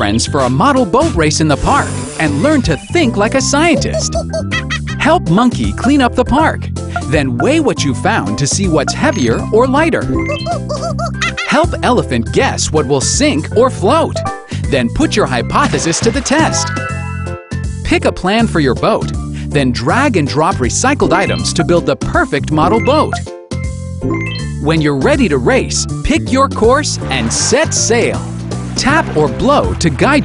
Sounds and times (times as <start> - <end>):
Speech: 0.0 - 4.2, 5.0 - 10.1, 11.5 - 16.6, 17.8 - 23.2, 24.6 - 28.2, 28.8 - 30.2
Music: 0.0 - 30.2.